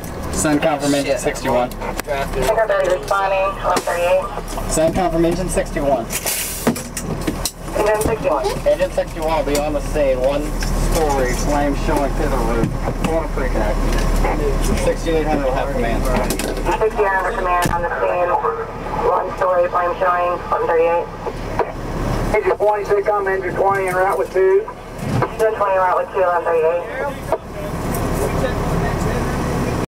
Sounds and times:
Vehicle: 0.0s - 29.8s
Speech: 0.4s - 6.1s, 7.8s - 21.2s, 22.3s - 29.8s.

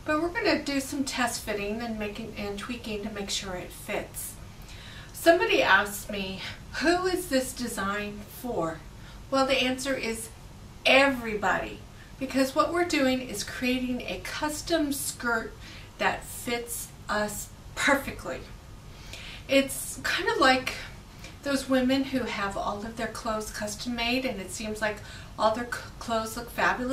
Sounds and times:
Speech: 0.0s - 4.4s, 5.2s - 18.5s, 19.5s - 26.9s.

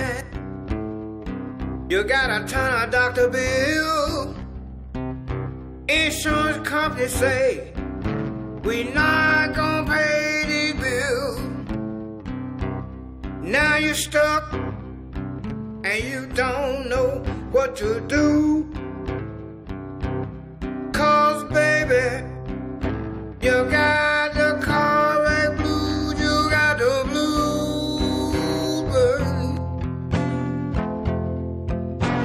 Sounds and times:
Blues: 0.0s - 32.2s.

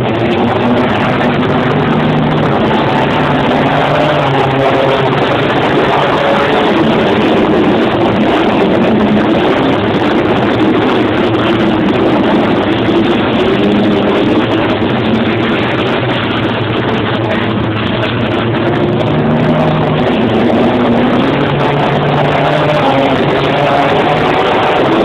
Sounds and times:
Outside, urban or manmade: 0.0s - 25.0s.

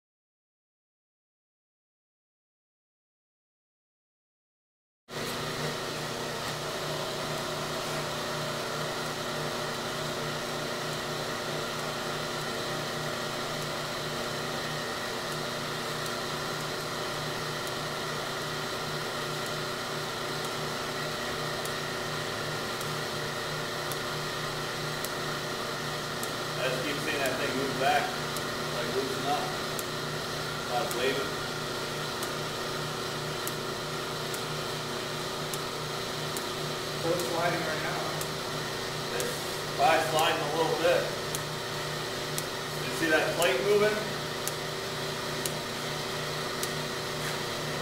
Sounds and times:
Speech: 26.6s - 29.6s, 30.7s - 31.4s, 37.0s - 38.2s, 39.1s - 41.2s, 42.8s - 44.1s.

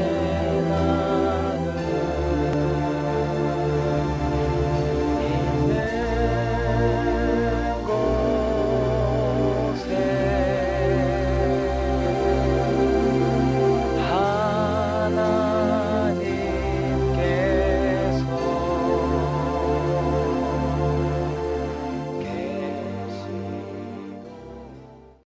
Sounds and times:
New-age music: 0.0s - 25.2s.

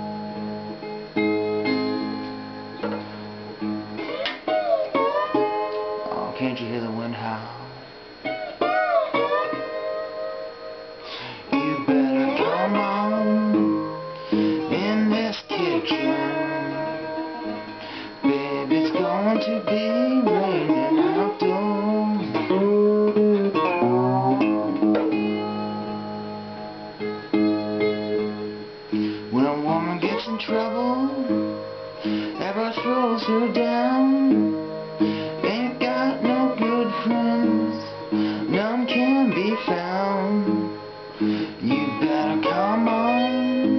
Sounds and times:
Tapping (guitar technique): 0.0s - 7.1s, 11.1s - 43.7s
Acoustic guitar: 0.0s - 43.7s.

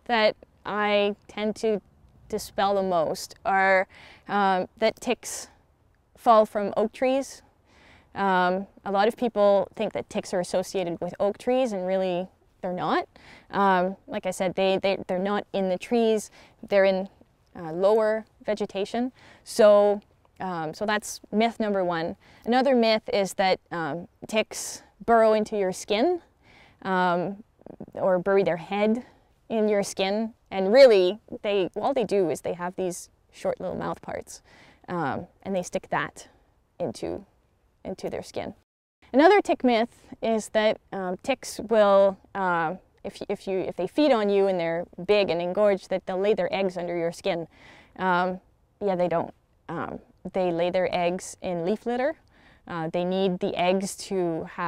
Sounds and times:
Speech: 0.0s - 5.5s, 6.2s - 7.4s, 8.2s - 26.2s, 26.8s - 54.6s.

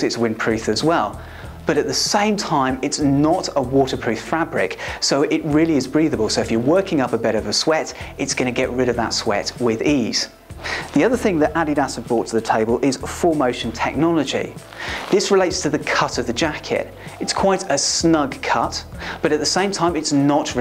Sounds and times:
Speech: 0.0s - 20.6s.

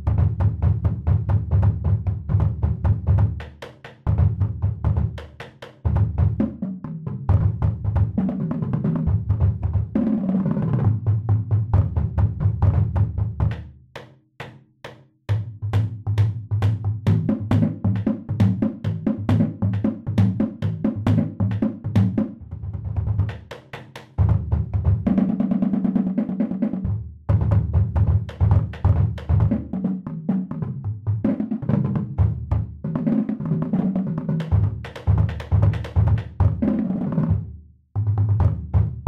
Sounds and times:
Bass drum: 0.0s - 13.8s, 15.3s - 25.4s, 26.8s - 29.8s, 30.4s - 33.0s, 34.4s - 39.0s.

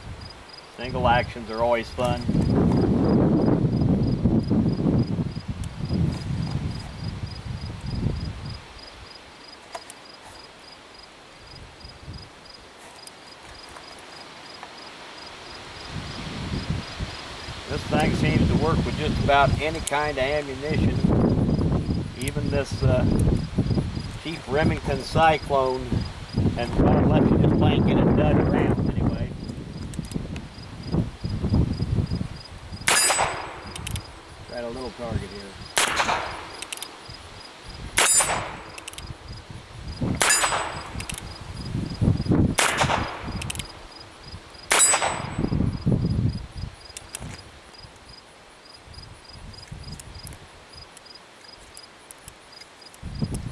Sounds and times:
Outside, rural or natural: 0.0s - 53.5s.

